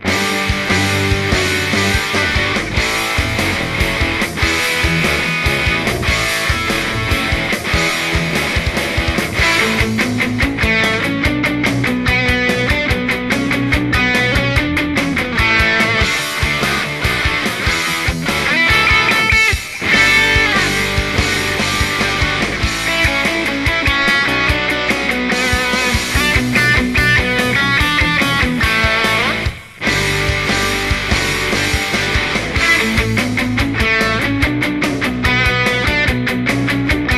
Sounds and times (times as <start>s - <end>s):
Rock and roll: 0.0s - 37.1s.